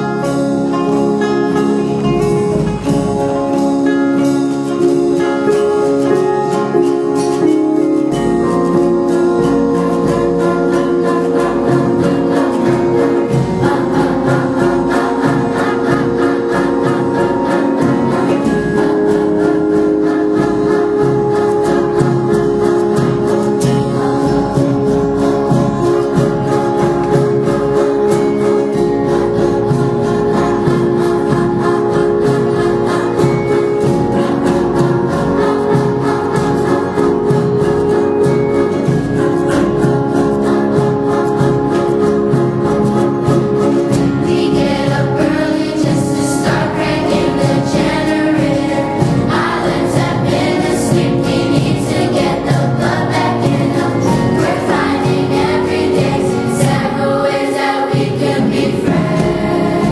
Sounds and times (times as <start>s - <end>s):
Gospel music: 0.0s - 59.9s
Choir: 4.8s - 59.9s.